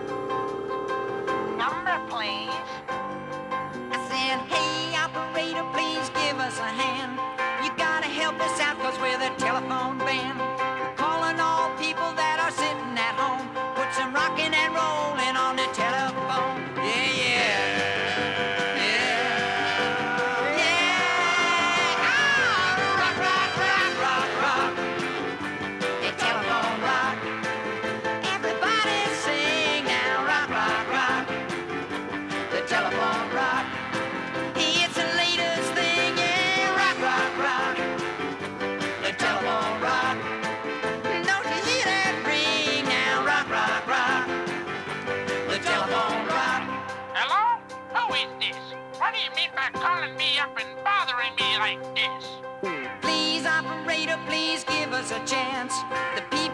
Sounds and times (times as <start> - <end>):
Music: 0.0 - 56.5.